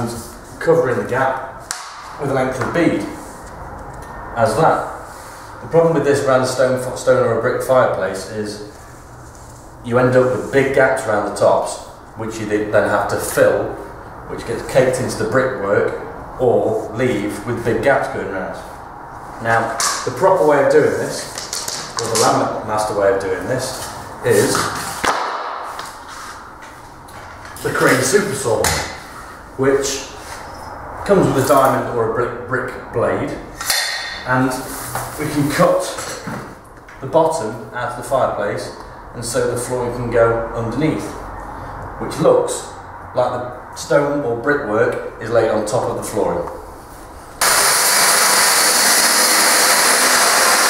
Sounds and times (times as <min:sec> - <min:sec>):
Speech: 0:00.0 - 0:01.6, 0:02.2 - 0:03.2, 0:04.4 - 0:05.0, 0:05.6 - 0:08.8, 0:09.8 - 0:18.8, 0:19.4 - 0:21.4, 0:22.0 - 0:24.8, 0:27.6 - 0:29.0, 0:29.6 - 0:30.2, 0:31.0 - 0:33.5, 0:34.2 - 0:41.2, 0:42.0 - 0:46.6.